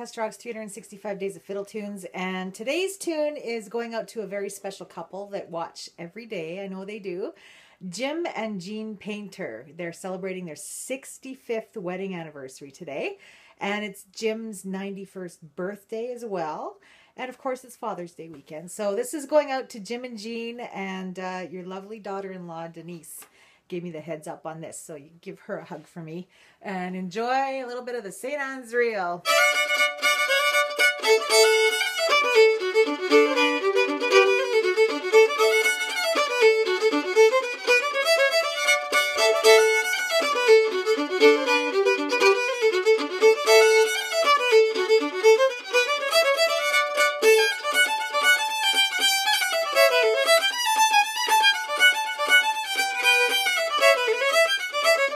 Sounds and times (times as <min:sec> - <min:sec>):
Speech: 0:00.0 - 0:29.3
Violin, fiddle: 0:29.2 - 0:55.1.